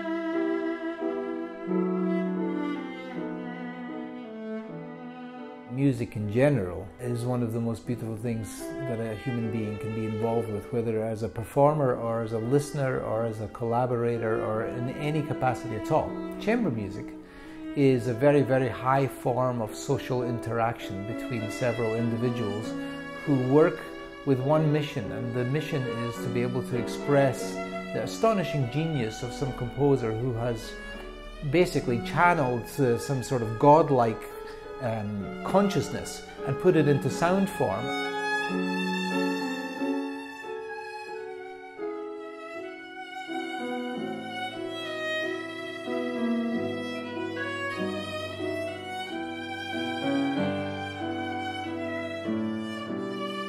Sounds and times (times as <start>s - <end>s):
Music: 0.0s - 53.4s
Speech: 5.7s - 17.2s, 17.8s - 38.0s.